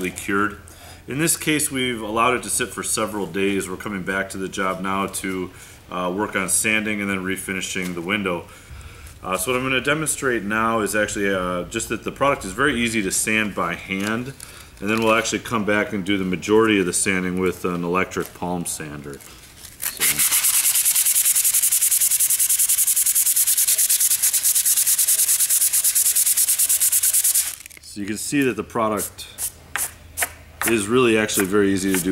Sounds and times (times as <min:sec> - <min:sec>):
Speech: 0:00.0 - 0:08.5, 0:09.2 - 0:19.2, 0:27.8 - 0:29.4, 0:30.6 - 0:32.1.